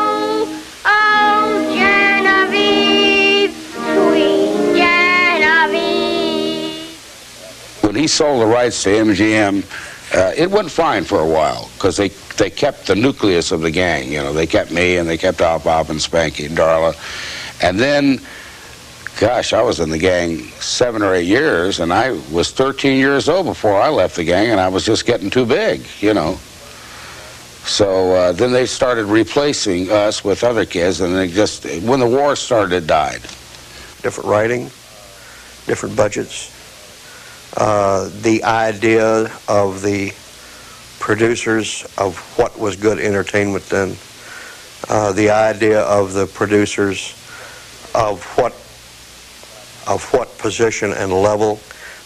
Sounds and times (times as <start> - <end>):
Music: 0.0 - 7.0.